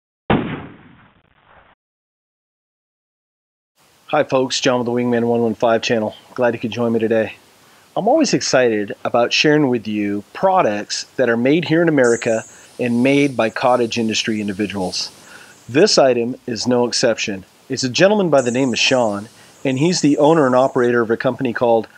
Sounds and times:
Speech: 4.1 - 7.4, 8.0 - 21.9.

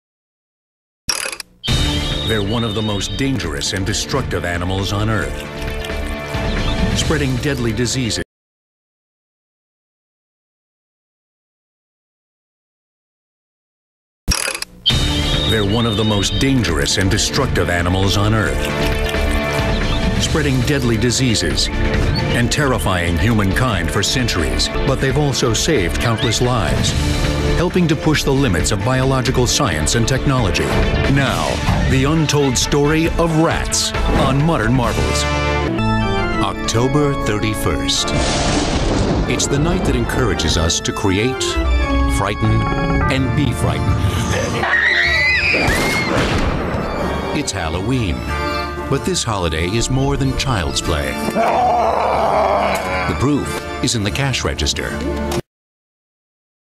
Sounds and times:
Music: 1.6 - 8.3, 14.8 - 55.5
Speech: 2.3 - 5.4, 7.0 - 8.3, 15.5 - 18.6, 20.2 - 21.7, 22.4 - 27.0, 27.6 - 35.3, 36.4 - 38.2, 39.3 - 44.7, 47.4 - 48.3, 48.9 - 51.3, 53.0 - 55.1.

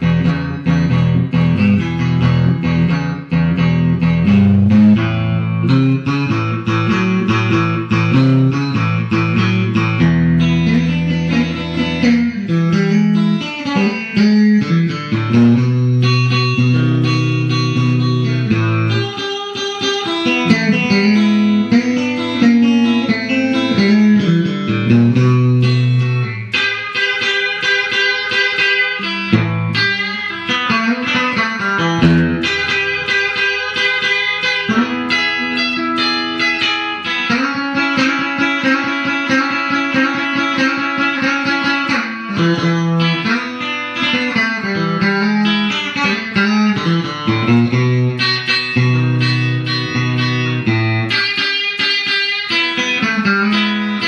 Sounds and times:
Electric guitar: 0.0 - 54.0
Strum: 0.0 - 54.0.

